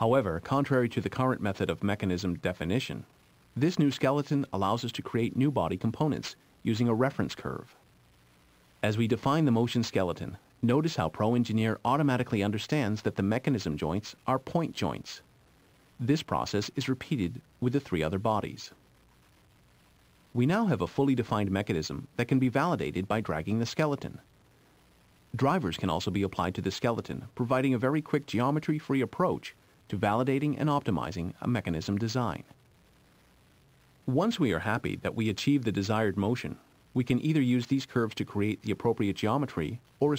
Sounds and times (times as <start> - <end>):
Speech: 0.0 - 7.8, 8.8 - 15.3, 16.0 - 18.8, 20.3 - 24.3, 25.3 - 32.6, 34.0 - 40.1.